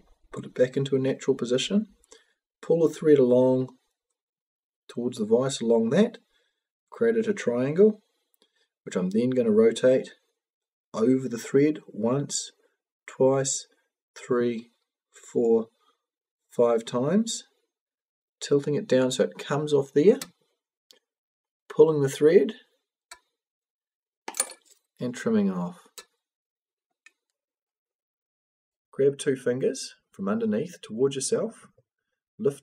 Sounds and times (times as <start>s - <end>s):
Speech: 0.3s - 2.0s, 2.6s - 3.8s, 4.9s - 6.2s, 6.9s - 8.0s, 8.9s - 10.2s, 11.0s - 15.7s, 16.6s - 17.5s, 18.4s - 20.3s, 21.7s - 22.7s, 25.0s - 26.1s, 28.9s - 31.8s, 32.4s - 32.6s.